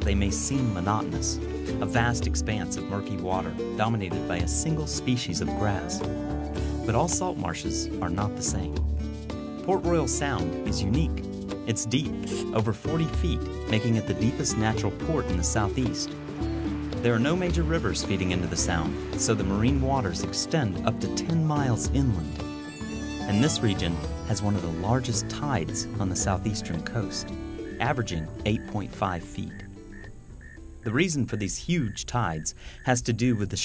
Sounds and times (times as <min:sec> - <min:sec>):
Speech: 0:00.0 - 0:06.0, 0:06.8 - 0:08.8, 0:09.6 - 0:16.2, 0:17.0 - 0:22.3, 0:23.2 - 0:29.7, 0:30.9 - 0:33.6
Music: 0:00.0 - 0:31.8.